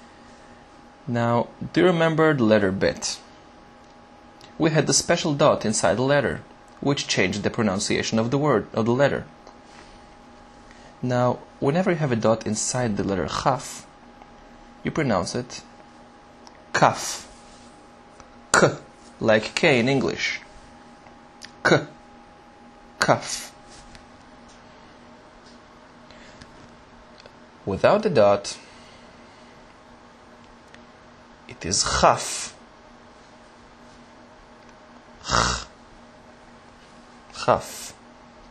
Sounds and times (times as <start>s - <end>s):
Speech: 1.1s - 3.3s, 4.6s - 9.3s, 11.0s - 13.9s, 14.8s - 15.7s, 16.7s - 17.3s, 18.5s - 20.5s, 21.5s - 22.0s, 23.0s - 23.6s, 27.6s - 28.6s, 31.5s - 32.6s, 37.3s - 38.0s.